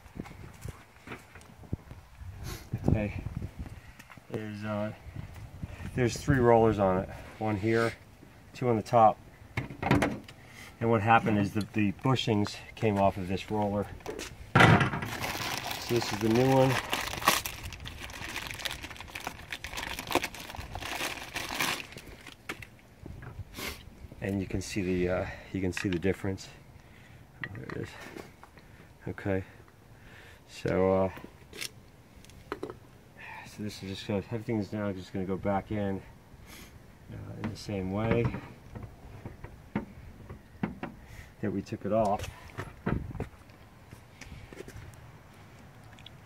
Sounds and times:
Speech: 2.8s - 3.2s, 4.3s - 5.0s, 5.9s - 8.0s, 8.6s - 9.2s, 10.8s - 14.0s, 15.7s - 16.8s, 24.2s - 26.6s, 27.6s - 28.0s, 29.0s - 29.6s, 30.5s - 31.2s, 33.2s - 36.1s, 37.1s - 38.4s, 41.4s - 42.4s
Crumpling, crinkling: 15.0s - 22.7s.

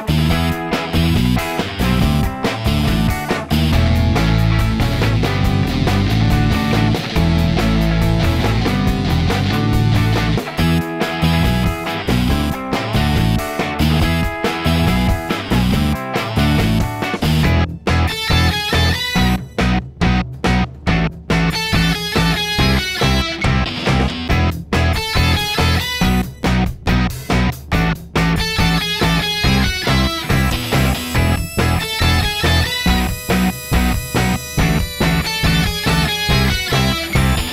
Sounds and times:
Music: 0.0s - 37.5s.

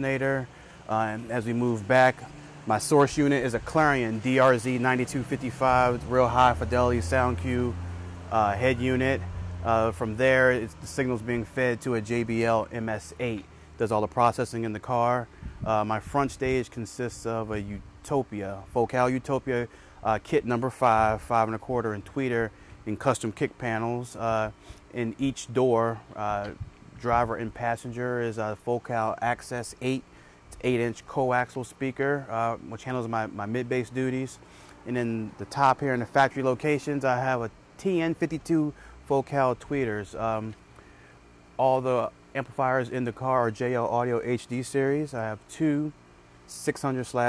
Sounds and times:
Speech: 0.0s - 40.6s, 41.6s - 47.2s.

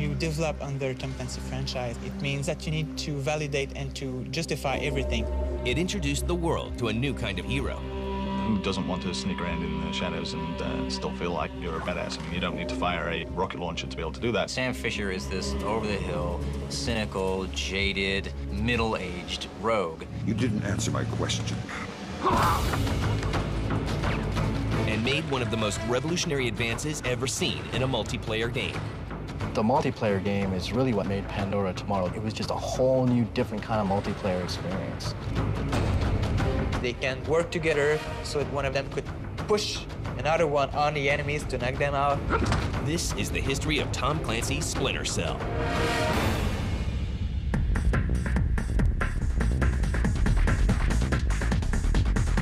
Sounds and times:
Music: 0.0s - 52.4s.

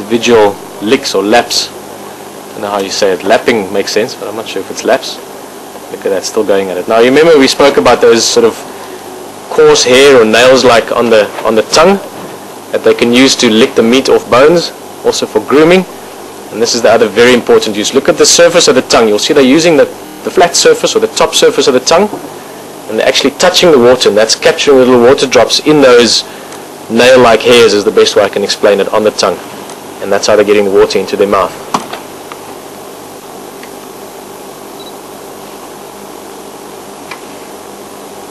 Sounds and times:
Speech: 0.0s - 1.8s, 2.6s - 5.2s, 5.9s - 8.7s, 9.5s - 12.1s, 12.7s - 15.9s, 16.5s - 22.2s, 22.9s - 26.3s, 26.9s - 29.4s, 30.0s - 31.6s.

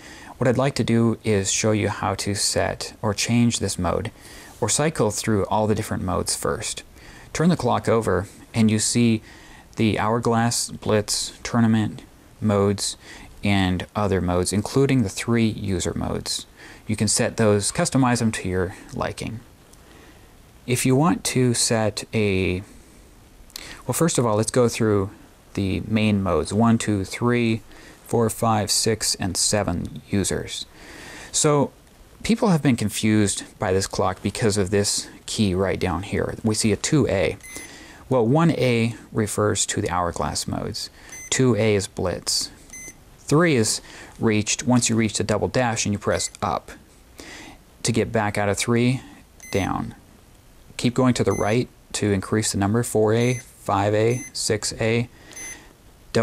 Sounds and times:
Speech: 0.4s - 9.2s, 9.8s - 19.5s, 20.7s - 22.7s, 23.9s - 30.7s, 31.3s - 37.5s, 38.1s - 42.6s, 43.3s - 46.8s, 47.8s - 50.0s, 50.8s - 55.1s.

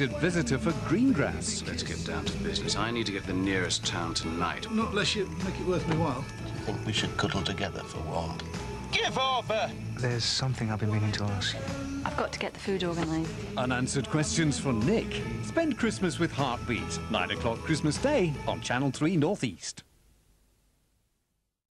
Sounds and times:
Music: 0.0s - 19.7s
Speech: 9.0s - 11.6s, 12.2s - 19.8s.

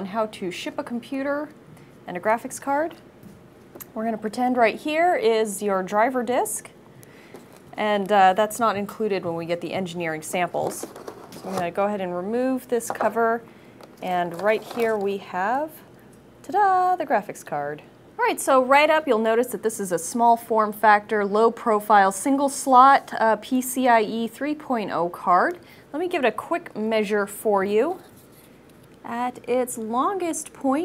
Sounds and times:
Speech: 0.0s - 3.0s, 3.9s - 6.8s, 7.8s - 13.4s, 14.0s - 28.1s, 29.0s - 30.8s.

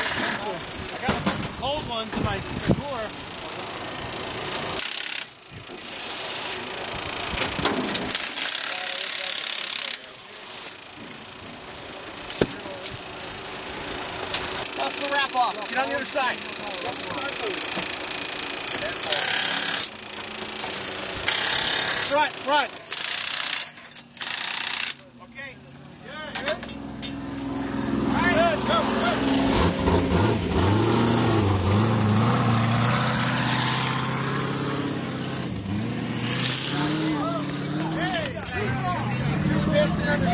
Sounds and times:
Ratchet, pawl: 0.0s - 25.2s
Gears: 3.1s - 10.9s, 14.3s - 25.1s.

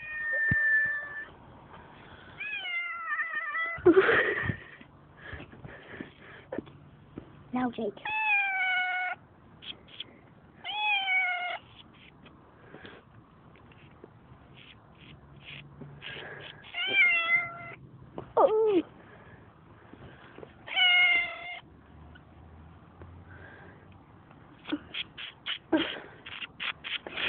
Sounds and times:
Meow: 0.0s - 1.3s, 2.4s - 3.8s, 8.0s - 9.2s, 10.6s - 11.7s, 16.7s - 17.8s, 20.7s - 21.6s.

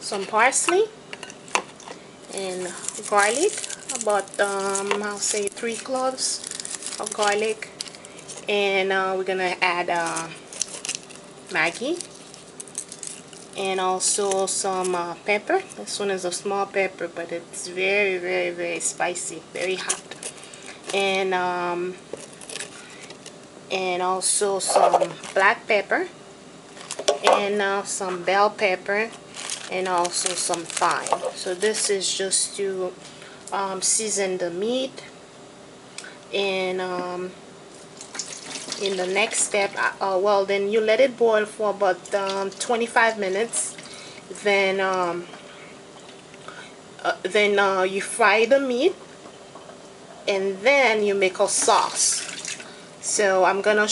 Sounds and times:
Sink (filling or washing): 38.1s - 39.4s, 51.7s - 52.7s.

